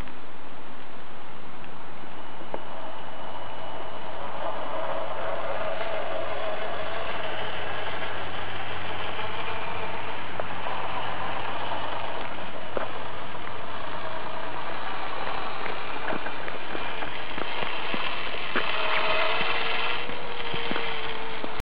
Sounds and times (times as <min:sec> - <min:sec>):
Truck: 0:00.0 - 0:21.6.